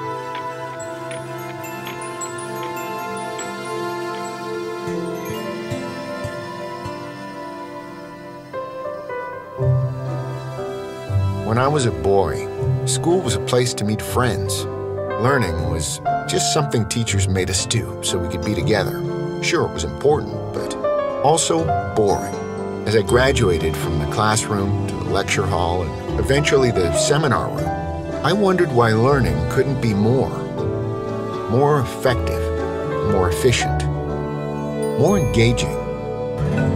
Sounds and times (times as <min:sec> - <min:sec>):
Music: 0:00.0 - 0:36.7
Speech: 0:11.4 - 0:30.4, 0:31.5 - 0:33.9, 0:35.0 - 0:35.8.